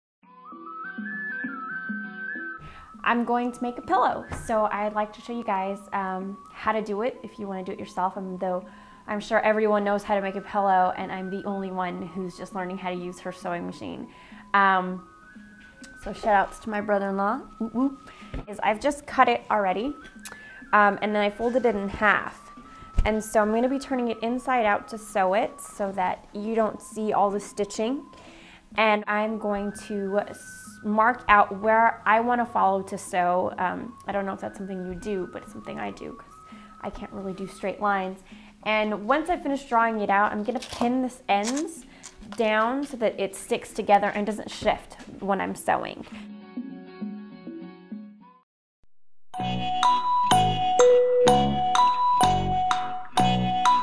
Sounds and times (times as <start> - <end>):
Music: 0.2 - 48.4, 49.4 - 53.8
Speech: 3.1 - 14.0, 16.0 - 20.0, 20.8 - 22.4, 23.1 - 28.1, 28.8 - 36.2, 36.8 - 46.1.